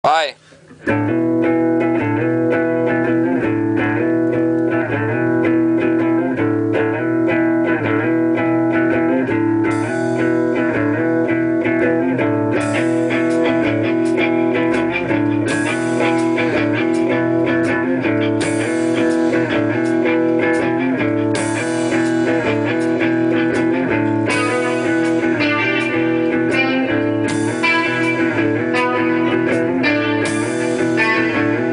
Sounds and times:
Speech: 0.0s - 0.4s
Electric guitar: 0.2s - 31.7s
Tapping (guitar technique): 0.4s - 31.7s.

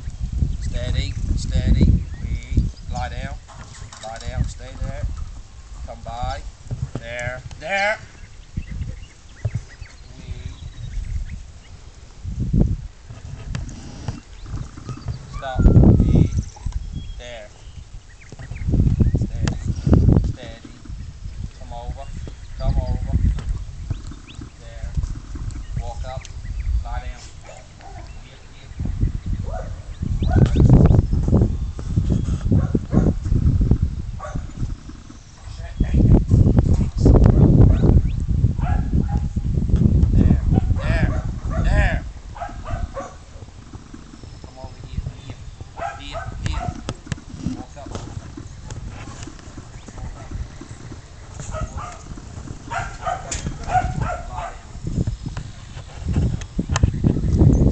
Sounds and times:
Speech: 0.7s - 3.4s, 4.0s - 5.1s, 5.9s - 8.0s, 15.4s - 16.4s, 17.2s - 17.6s, 20.3s - 20.8s, 21.6s - 23.2s, 24.6s - 25.0s, 25.8s - 26.2s, 26.8s - 27.4s, 44.5s - 45.4s.

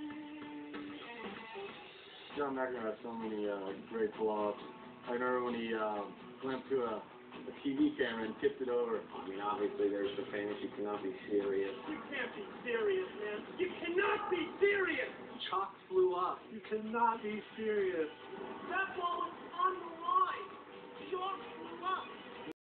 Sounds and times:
Speech: 2.4s - 18.1s.

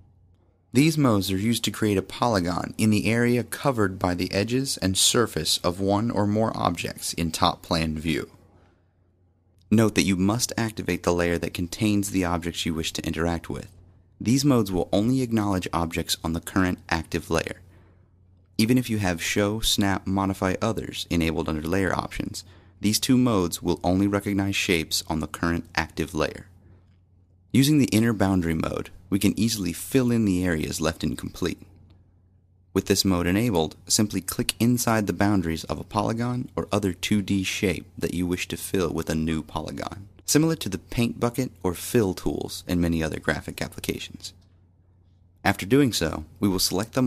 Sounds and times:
Speech: 0.7s - 8.4s, 9.7s - 17.7s, 18.6s - 26.6s, 27.5s - 31.8s, 32.8s - 44.4s, 45.4s - 47.0s.

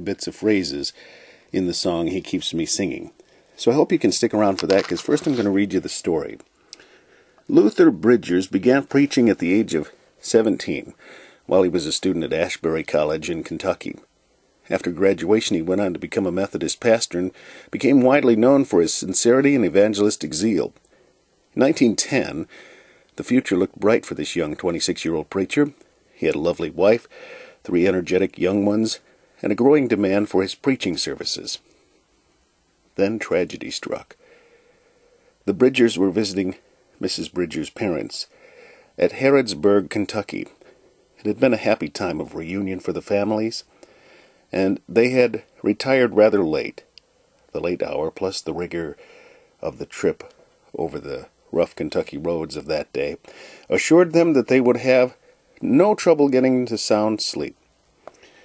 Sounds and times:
Speech: 0.0s - 6.5s, 7.5s - 20.8s, 21.6s - 22.5s, 23.2s - 31.6s, 33.0s - 34.2s, 35.4s - 38.3s, 39.0s - 40.6s, 41.2s - 43.7s, 44.5s - 46.9s, 47.5s - 49.0s, 49.6s - 57.6s.

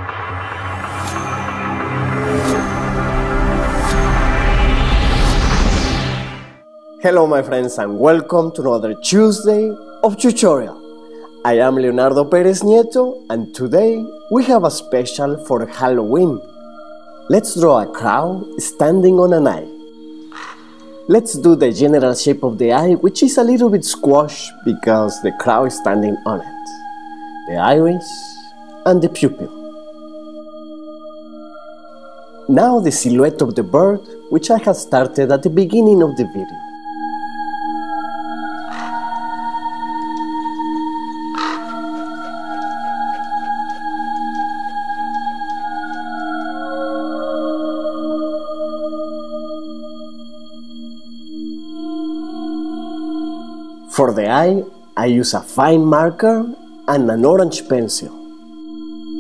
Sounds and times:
Ambient music: 0.0s - 59.2s
Speech: 7.0s - 10.8s, 11.5s - 16.4s, 17.3s - 19.7s, 21.1s - 26.7s, 27.5s - 29.5s, 32.5s - 36.5s, 53.9s - 58.1s.

